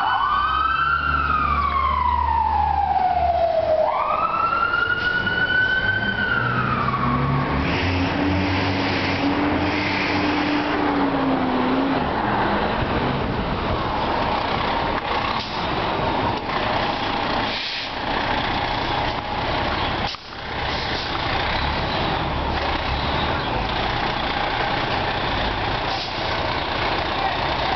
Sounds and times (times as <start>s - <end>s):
Fire engine, fire truck (siren): 0.0s - 27.7s
Outside, urban or manmade: 0.0s - 27.7s.